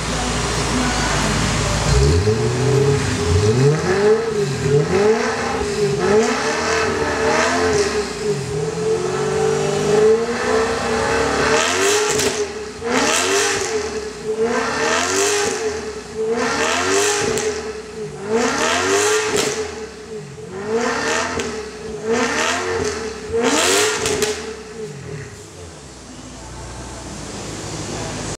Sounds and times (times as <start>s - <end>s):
Speech: 0.0s - 2.2s, 25.3s - 28.3s.